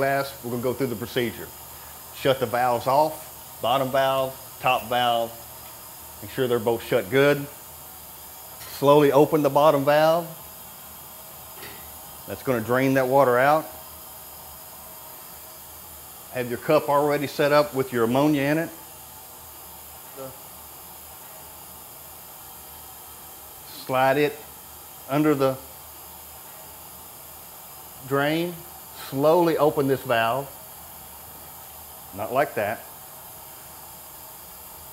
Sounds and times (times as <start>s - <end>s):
Speech: 0.0s - 1.6s, 2.2s - 5.4s, 6.2s - 7.6s, 8.7s - 10.4s, 12.3s - 13.8s, 16.3s - 18.8s, 20.1s - 20.4s, 23.7s - 24.5s, 25.1s - 25.7s, 28.0s - 30.5s, 32.2s - 32.9s.